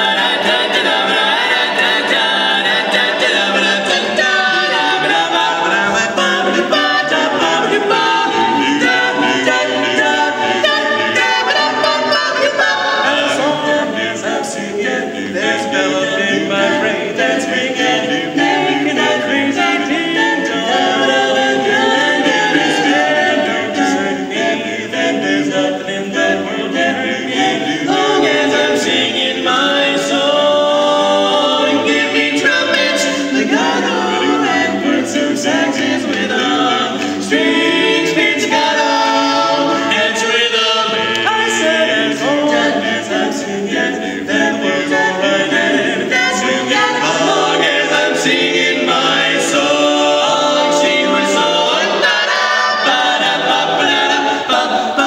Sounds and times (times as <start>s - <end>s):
Choir: 0.0s - 55.0s.